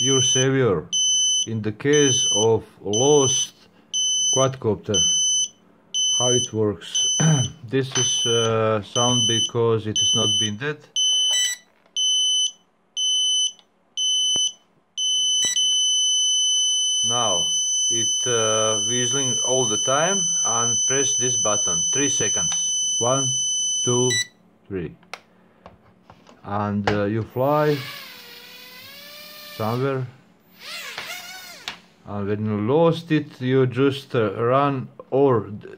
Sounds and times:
Buzzer: 0:00.0 - 0:00.4, 0:01.0 - 0:02.4, 0:03.0 - 0:04.4, 0:05.0 - 0:24.3
Speech: 0:00.0 - 0:00.9, 0:01.5 - 0:03.7, 0:04.4 - 0:05.1, 0:06.2 - 0:10.9, 0:17.0 - 0:25.0, 0:26.4 - 0:27.9, 0:29.6 - 0:30.2, 0:32.0 - 0:35.7.

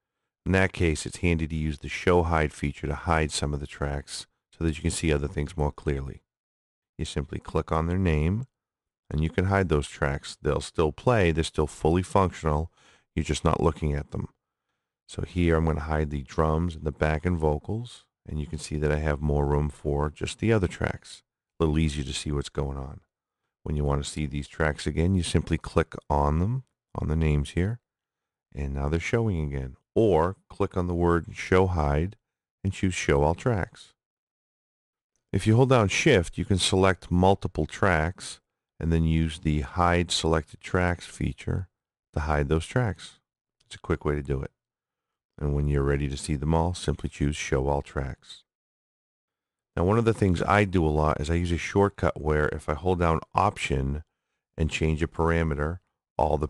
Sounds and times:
Speech: 0:00.5 - 0:06.3, 0:07.0 - 0:14.4, 0:15.1 - 0:27.8, 0:28.6 - 0:34.0, 0:35.4 - 0:44.6, 0:45.4 - 0:48.5, 0:49.8 - 0:56.4.

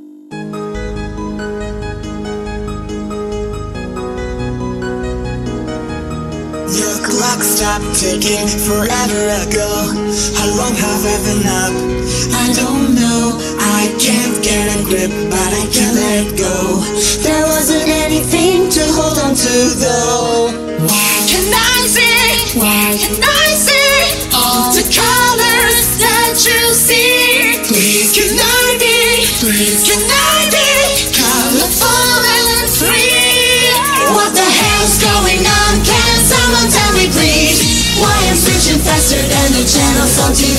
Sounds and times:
Music: 0:00.0 - 0:40.5.

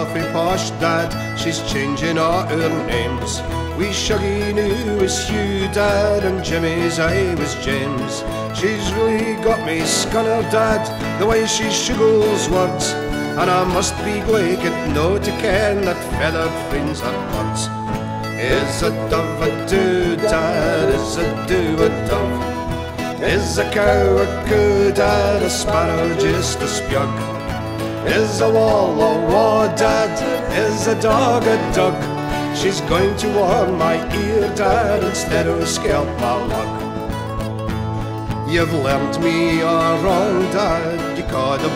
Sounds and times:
Music: 0:00.0 - 0:41.7.

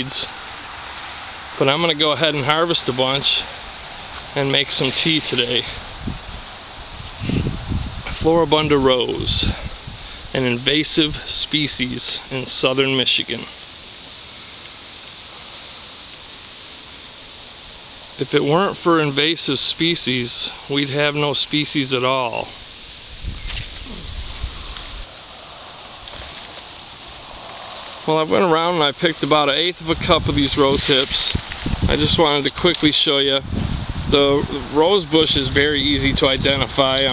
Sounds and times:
Speech: 0:00.0 - 0:00.3, 0:01.6 - 0:03.6, 0:04.4 - 0:05.8, 0:08.1 - 0:09.7, 0:10.3 - 0:13.6, 0:18.2 - 0:22.6, 0:28.0 - 0:33.4, 0:34.1 - 0:37.1
Outside, rural or natural: 0:00.0 - 0:37.1.

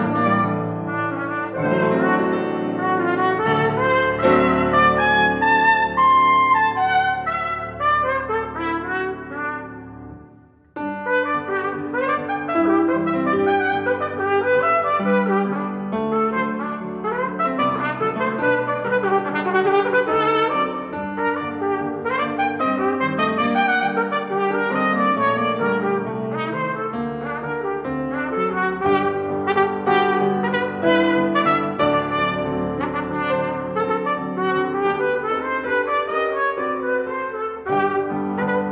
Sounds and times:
Piano: 0:00.0 - 0:38.7
Trumpet: 0:00.0 - 0:38.7.

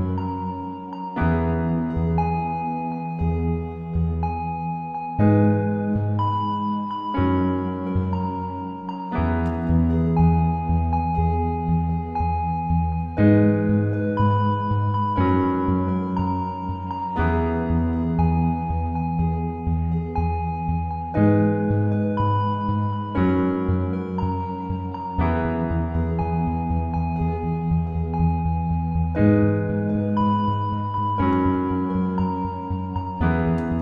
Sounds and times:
Music: 0:00.0 - 0:33.8.

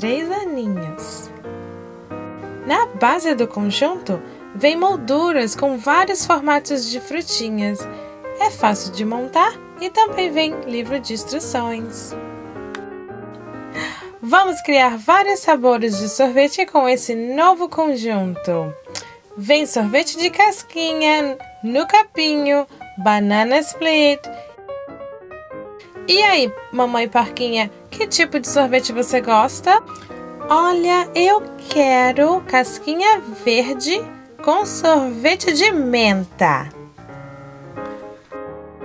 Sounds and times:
Speech: 0:00.0 - 0:01.3, 0:02.7 - 0:12.2, 0:14.2 - 0:18.8, 0:19.4 - 0:24.3, 0:26.1 - 0:29.8, 0:30.5 - 0:36.8
Music: 0:00.0 - 0:38.8.

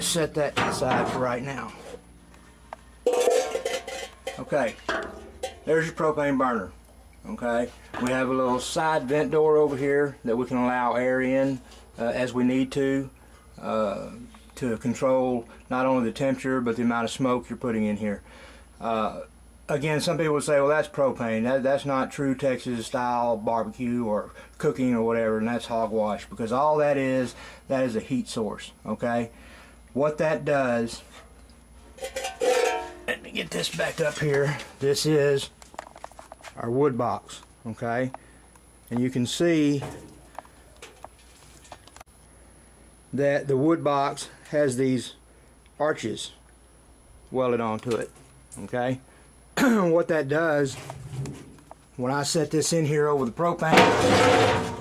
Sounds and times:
Speech: 0:00.0 - 0:02.0, 0:04.4 - 0:05.0, 0:05.6 - 0:18.2, 0:18.8 - 0:29.3, 0:30.0 - 0:31.1, 0:33.1 - 0:35.6, 0:36.5 - 0:38.2, 0:38.9 - 0:40.0, 0:43.1 - 0:45.2, 0:45.8 - 0:46.4, 0:47.3 - 0:50.9, 0:52.0 - 0:54.8.

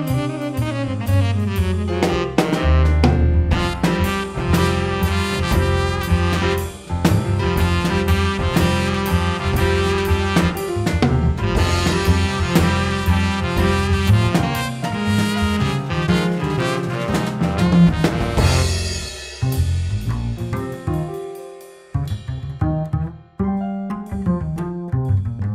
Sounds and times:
Jazz: 0:00.0 - 0:25.5.

